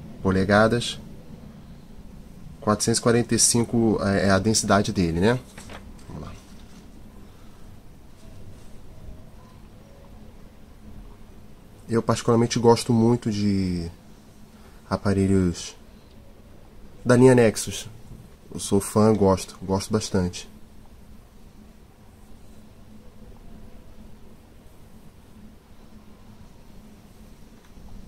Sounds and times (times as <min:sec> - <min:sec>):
Speech: 0:00.2 - 0:01.1, 0:02.6 - 0:06.5, 0:11.9 - 0:14.0, 0:14.9 - 0:15.8, 0:17.0 - 0:20.6.